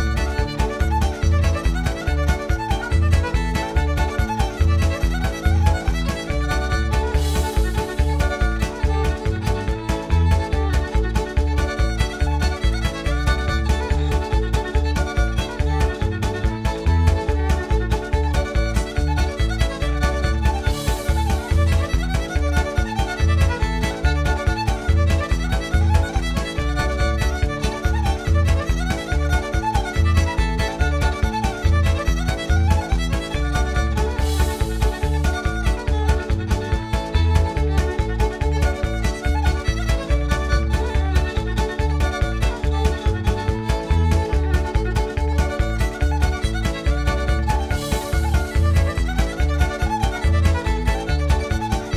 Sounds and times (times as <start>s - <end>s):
Violin, fiddle: 0.0s - 51.9s.